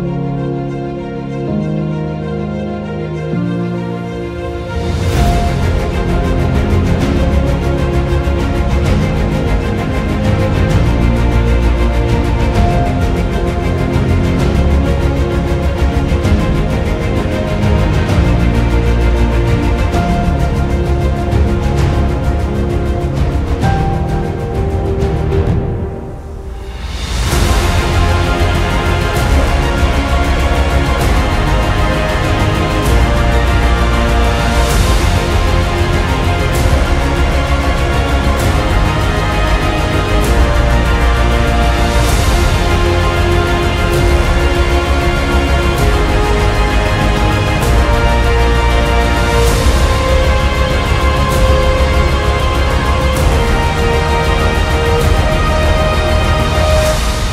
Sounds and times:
Music: 0.0 - 57.3.

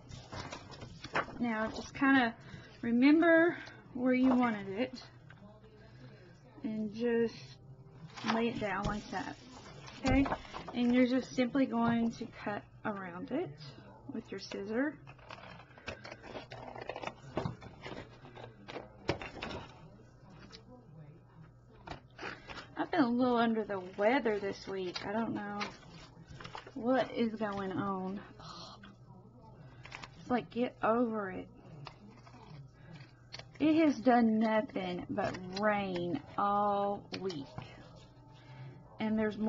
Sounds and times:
Inside, small room: 0.0 - 39.4
Speech: 1.4 - 15.0, 22.8 - 33.0, 33.6 - 38.1, 39.0 - 39.4.

